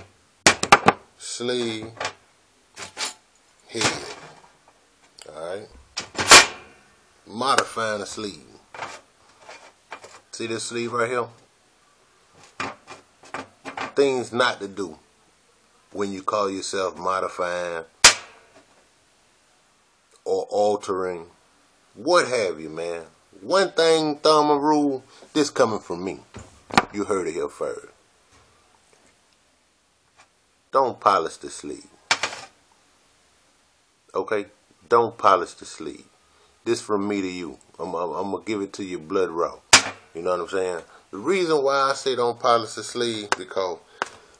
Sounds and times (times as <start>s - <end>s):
Speech: 1.2s - 2.0s, 3.7s - 4.3s, 5.2s - 5.8s, 7.3s - 8.6s, 10.3s - 11.4s, 14.0s - 15.0s, 15.9s - 17.9s, 20.2s - 21.4s, 22.0s - 26.3s, 26.9s - 28.0s, 30.7s - 32.0s, 34.1s - 36.1s, 36.7s - 39.6s, 40.2s - 43.8s.